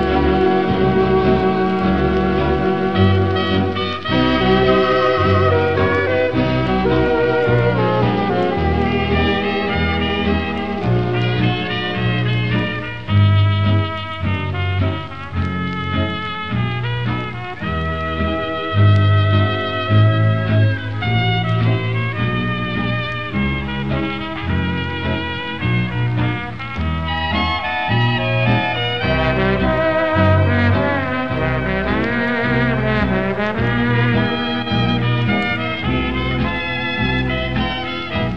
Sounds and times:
Music: 0.0 - 38.3.

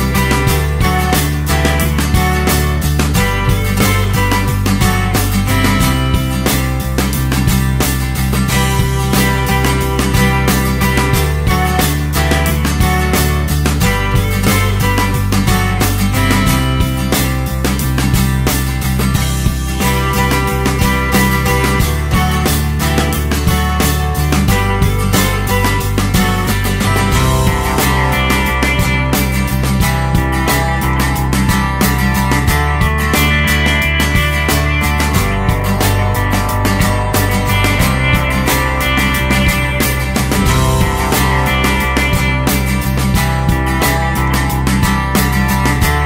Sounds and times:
Music: 0.0 - 46.0.

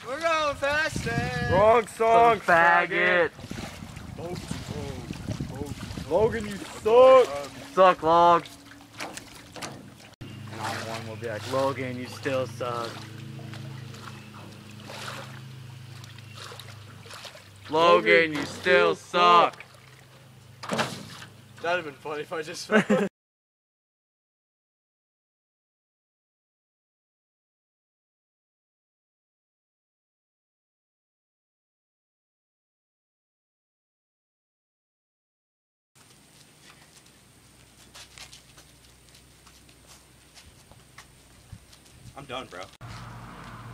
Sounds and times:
Speech: 0.0 - 3.4, 4.2 - 8.5, 10.6 - 13.0, 17.7 - 19.6, 21.6 - 22.8, 42.1 - 42.8.

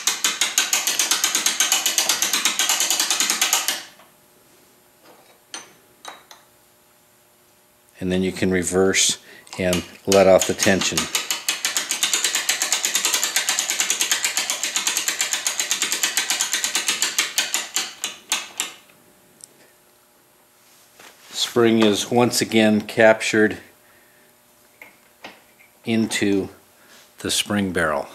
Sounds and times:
Speech: 8.0 - 11.1, 21.4 - 23.7, 25.9 - 26.6, 27.2 - 28.1.

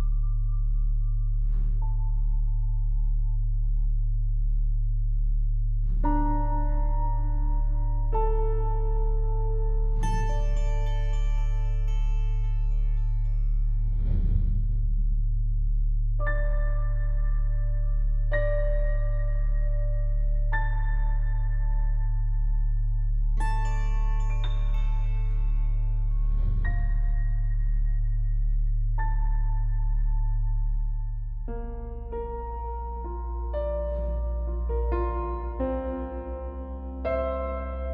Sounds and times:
Music: 0.0 - 37.9.

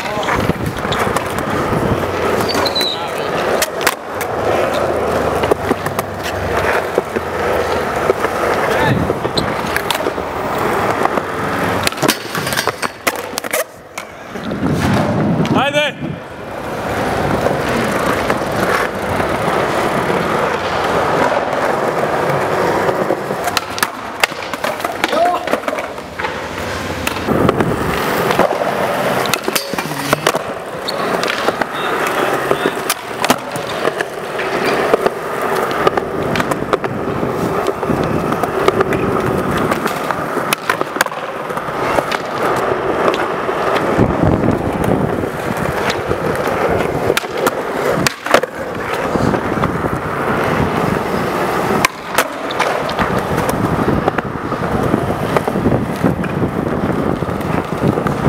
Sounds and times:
Skateboard: 0.0 - 58.2.

